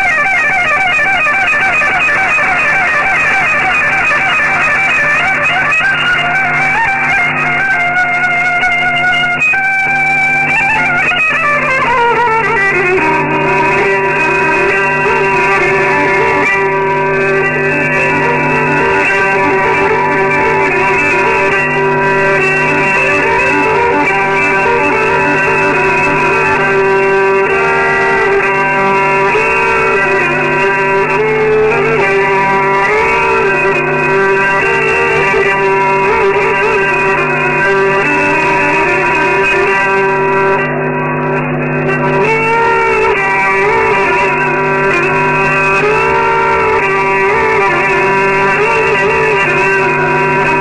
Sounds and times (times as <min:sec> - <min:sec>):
Violin, fiddle: 0:00.0 - 0:50.6.